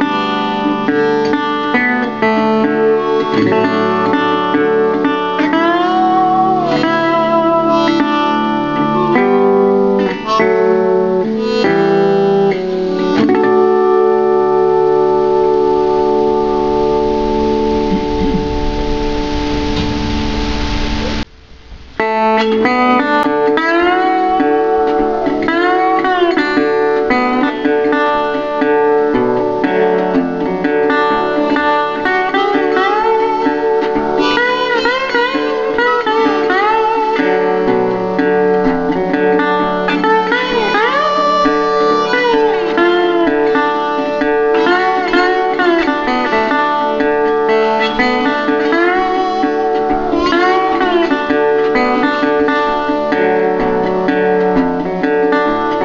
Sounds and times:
Steel guitar, slide guitar: 0:00.0 - 0:21.3, 0:22.0 - 0:55.8.

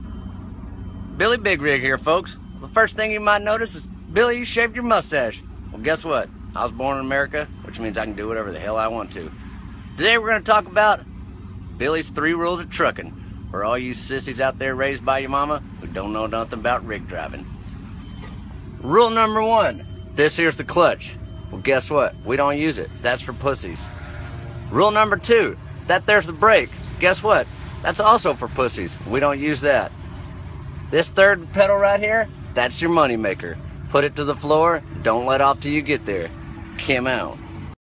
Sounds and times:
Truck: 0:00.0 - 0:37.8
Speech: 0:01.2 - 0:09.4, 0:10.0 - 0:11.0, 0:11.8 - 0:17.5, 0:18.8 - 0:23.9, 0:24.7 - 0:29.9, 0:30.9 - 0:37.4.

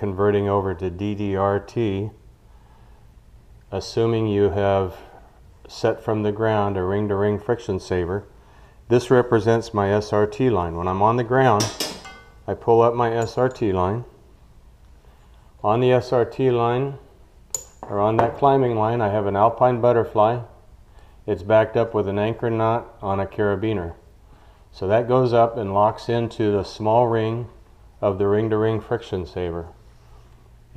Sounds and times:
Speech: 0:00.0 - 0:02.2, 0:03.7 - 0:08.3, 0:08.9 - 0:11.8, 0:12.5 - 0:14.2, 0:15.6 - 0:17.1, 0:17.8 - 0:20.6, 0:21.3 - 0:24.1, 0:24.7 - 0:29.8.

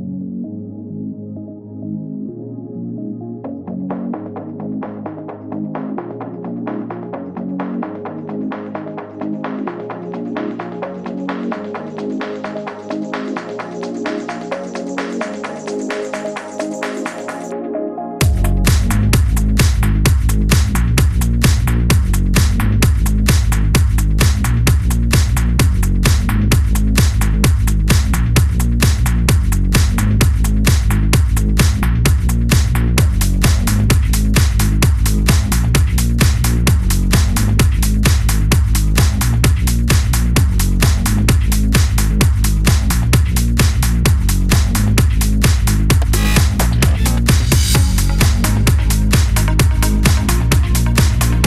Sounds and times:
Music: 0:00.0 - 0:51.4.

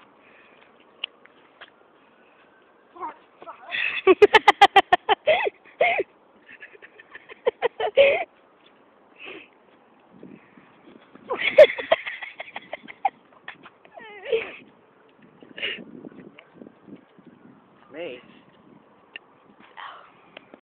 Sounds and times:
Speech: 0:17.9 - 0:18.3.

